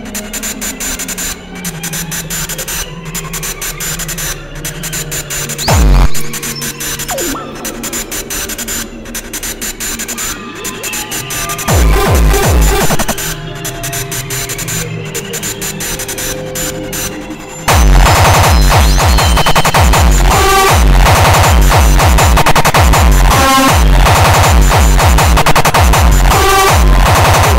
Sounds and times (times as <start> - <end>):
Music: 0.0 - 27.5.